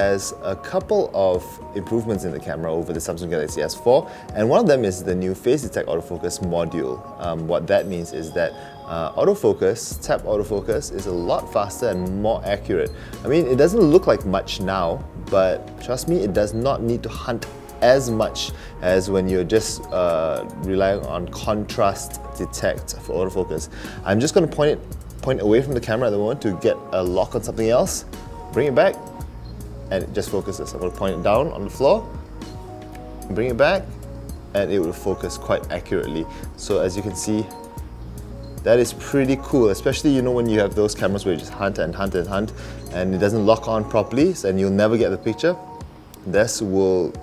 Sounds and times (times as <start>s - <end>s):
Speech: 0.0s - 29.0s, 29.9s - 32.1s, 33.3s - 33.9s, 34.6s - 37.5s, 38.6s - 45.6s, 46.2s - 47.2s
Music: 0.0s - 47.2s.